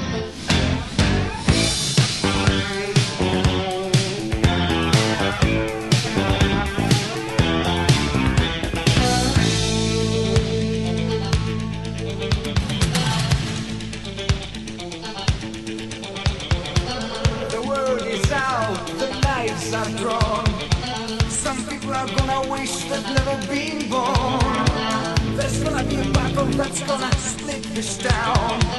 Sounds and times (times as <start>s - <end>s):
Music: 0.0s - 28.7s.